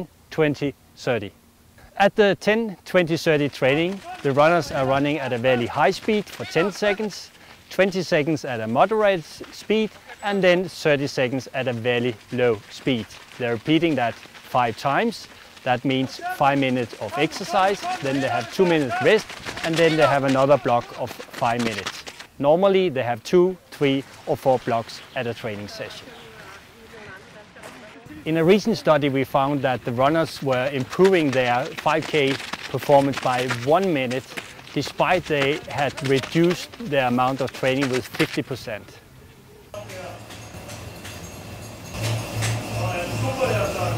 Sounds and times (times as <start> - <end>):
Male speech, man speaking: 0.0 - 1.4, 2.0 - 39.0, 39.8 - 40.3, 42.7 - 43.9
Run: 2.9 - 43.9.